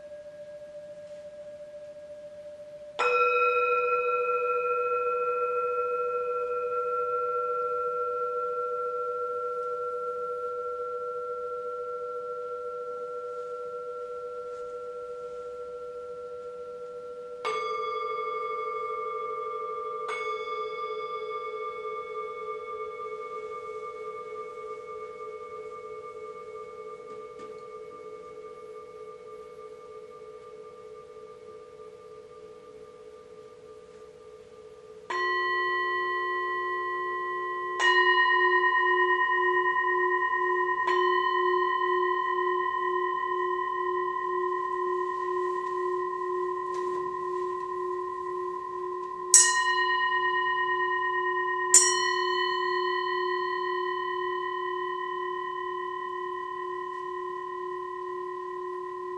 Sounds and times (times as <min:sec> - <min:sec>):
Singing bowl: 0:00.0 - 0:59.1.